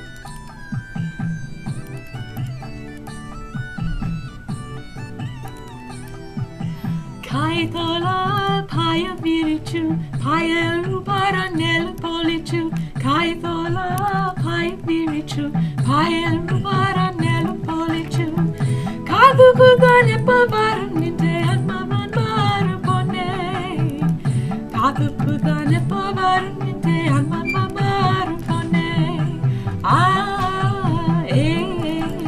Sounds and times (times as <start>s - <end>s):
Music: 0.0s - 32.2s
Female singing: 7.3s - 24.1s, 24.7s - 32.2s.